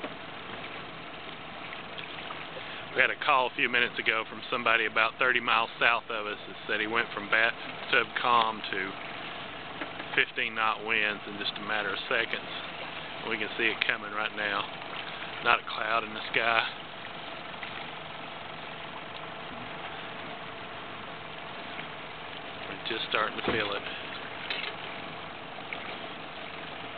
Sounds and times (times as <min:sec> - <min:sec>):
Speech: 0:02.9 - 0:09.0, 0:10.2 - 0:14.7, 0:15.4 - 0:16.8, 0:22.7 - 0:24.0.